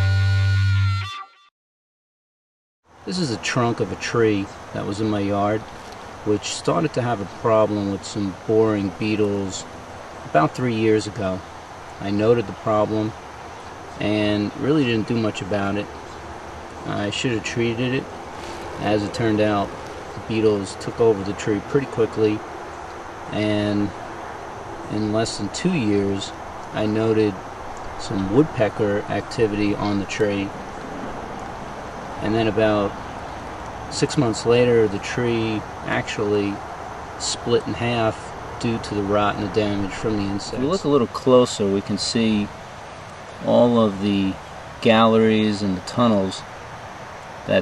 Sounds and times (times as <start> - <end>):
Speech: 3.1 - 9.7, 10.3 - 11.4, 12.0 - 13.2, 14.0 - 15.9, 16.8 - 18.1, 18.8 - 22.4, 23.3 - 24.0, 24.9 - 27.4, 28.0 - 30.5, 32.2 - 33.0, 33.9 - 36.6, 37.2 - 42.5, 43.4 - 46.5.